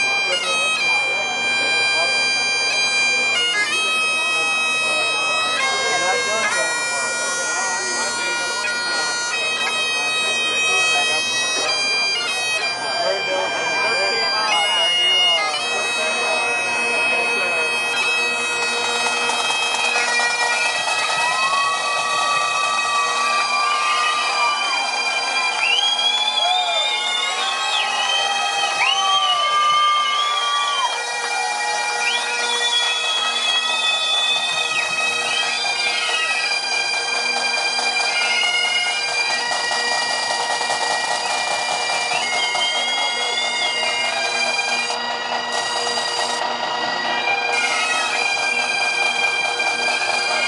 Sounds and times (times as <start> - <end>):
Music: 0.0 - 50.4.